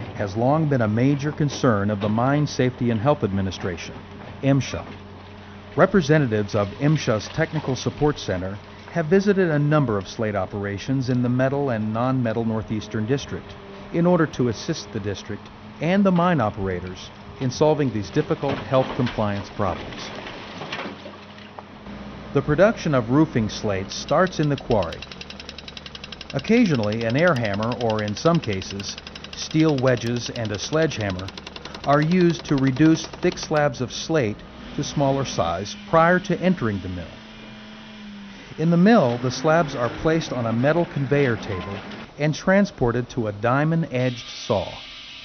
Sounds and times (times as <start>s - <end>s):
Outside, rural or natural: 0.0s - 43.2s
Speech: 0.2s - 5.0s, 5.8s - 20.2s, 22.4s - 25.0s, 26.4s - 31.3s, 31.9s - 37.2s, 38.6s - 44.8s
Jackhammer: 23.9s - 33.9s.